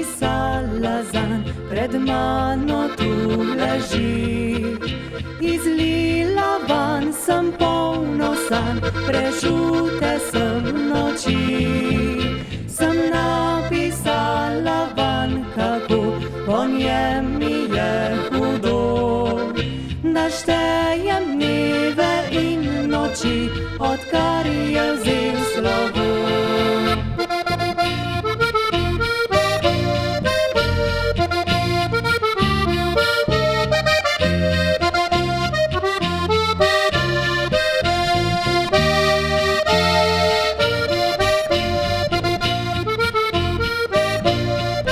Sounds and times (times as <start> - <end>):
Accordion: 0.0 - 44.9.